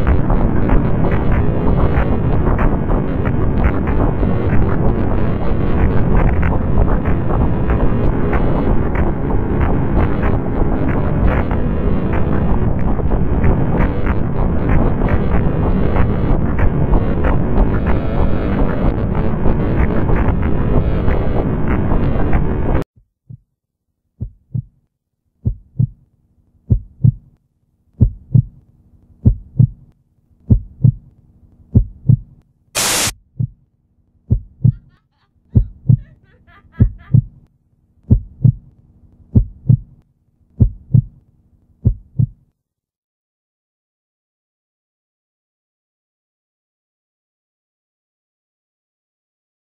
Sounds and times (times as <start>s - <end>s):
Heart sounds, heartbeat: 24.2s - 24.8s, 25.4s - 26.0s, 26.7s - 27.3s, 28.0s - 28.6s, 29.2s - 29.8s, 30.5s - 31.1s, 31.7s - 32.3s, 33.4s - 33.6s, 34.3s - 34.9s, 35.6s - 36.1s, 36.8s - 37.4s, 38.1s - 38.7s, 39.3s - 40.0s, 40.6s - 41.2s, 41.8s - 42.4s.